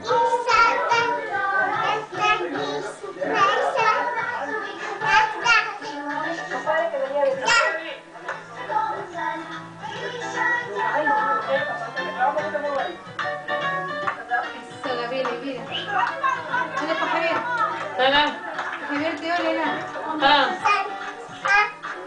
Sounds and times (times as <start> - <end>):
Synthetic singing: 0.0 - 13.0, 15.7 - 22.0
Music: 0.0 - 22.0.